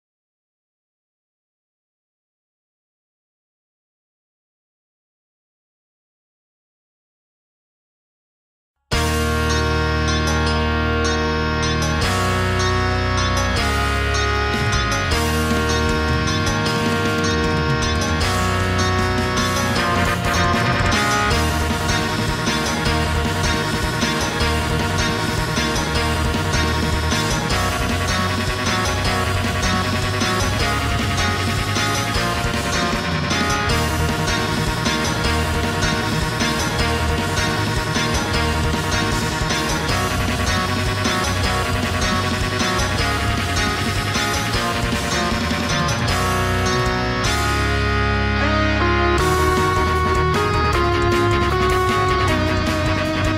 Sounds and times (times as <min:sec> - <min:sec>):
Electric guitar: 0:08.9 - 0:53.3.